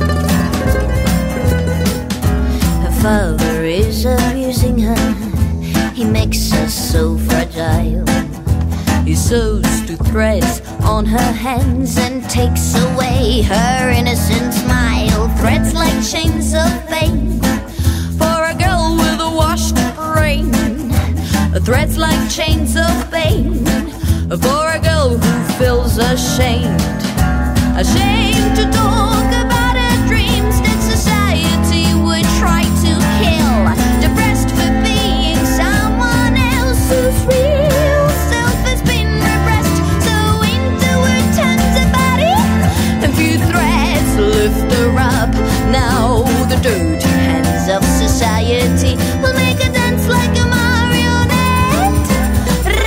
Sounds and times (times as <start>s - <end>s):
Music: 0.0s - 52.8s.